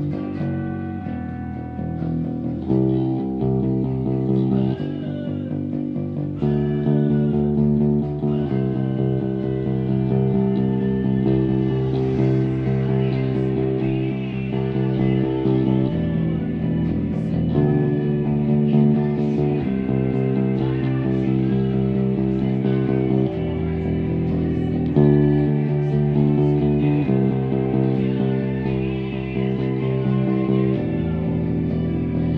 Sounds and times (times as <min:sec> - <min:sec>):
Bass guitar: 0:00.0 - 0:32.3.